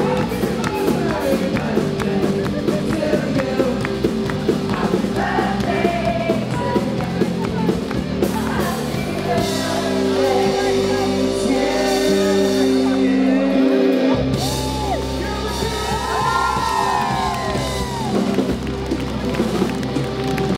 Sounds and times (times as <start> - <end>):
Music: 0.0 - 20.5
Female singing: 4.7 - 13.0.